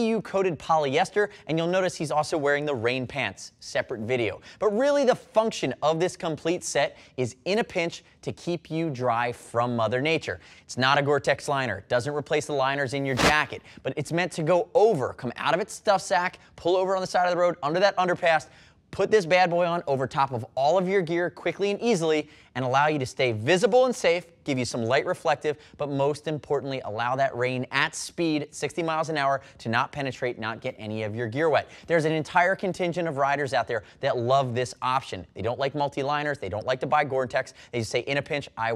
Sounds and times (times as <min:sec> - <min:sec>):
Speech: 0:00.0 - 0:38.7.